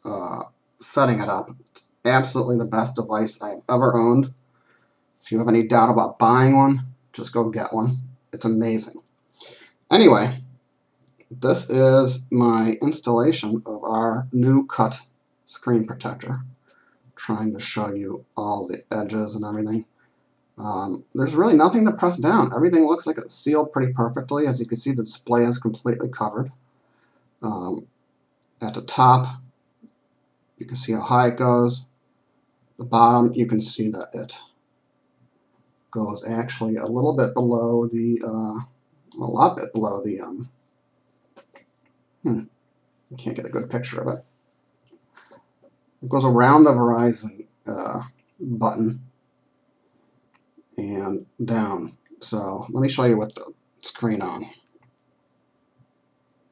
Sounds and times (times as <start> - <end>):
Speech: 0.0 - 4.4, 5.2 - 9.1, 9.9 - 10.5, 11.1 - 16.6, 17.2 - 19.9, 20.6 - 26.6, 27.4 - 29.5, 30.6 - 31.9, 32.8 - 34.6, 35.9 - 40.6, 42.2 - 44.3, 46.0 - 49.1, 50.7 - 54.7.